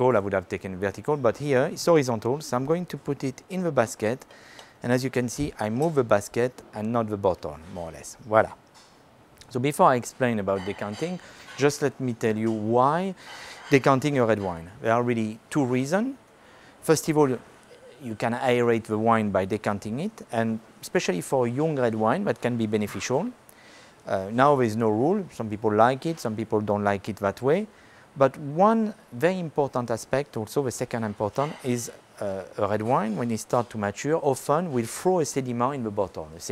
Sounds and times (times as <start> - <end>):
Speech: 0.0 - 4.2, 4.8 - 8.6, 9.4 - 16.2, 16.8 - 23.4, 24.1 - 36.5.